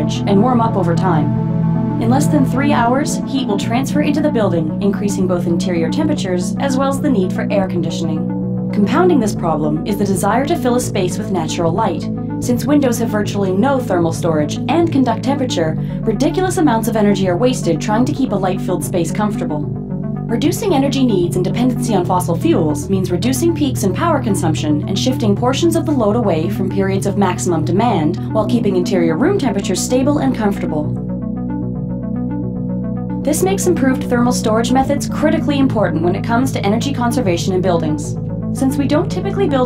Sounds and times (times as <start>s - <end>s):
Speech: 0.0s - 1.3s, 2.0s - 8.2s, 8.8s - 19.7s, 20.3s - 30.9s, 33.3s - 39.6s
Music: 0.0s - 39.6s.